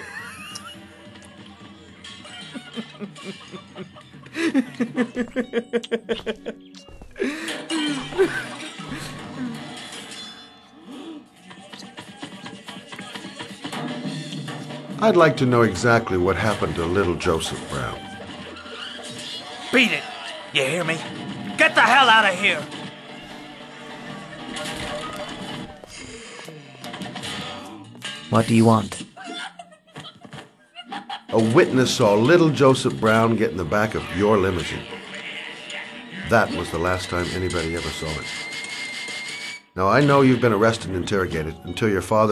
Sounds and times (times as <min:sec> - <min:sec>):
Speech: 0:15.0 - 0:18.0, 0:31.4 - 0:34.9, 0:36.2 - 0:38.2, 0:39.8 - 0:42.3.